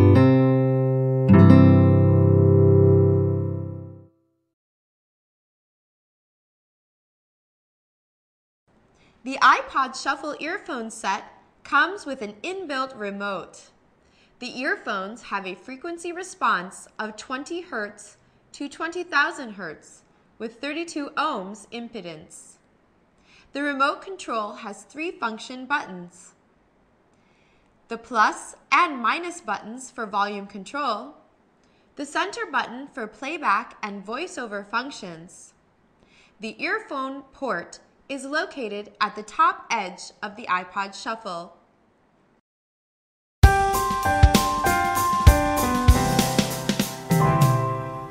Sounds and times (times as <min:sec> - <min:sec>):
Speech: 0:09.2 - 0:13.8, 0:14.4 - 0:22.6, 0:23.5 - 0:26.4, 0:27.9 - 0:31.3, 0:32.0 - 0:35.6, 0:36.4 - 0:41.6.